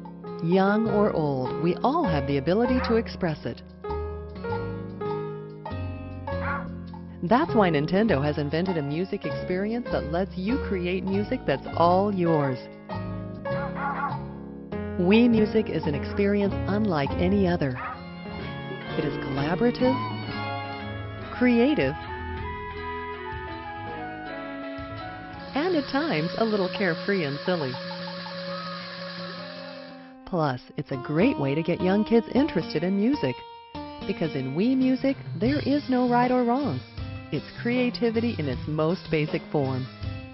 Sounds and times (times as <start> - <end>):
Music: 0.0 - 40.3
Speech: 0.4 - 3.6, 7.2 - 12.6, 15.0 - 17.8, 18.9 - 20.2, 21.4 - 22.0, 25.6 - 27.8, 30.3 - 33.4, 34.1 - 36.8, 37.4 - 39.9.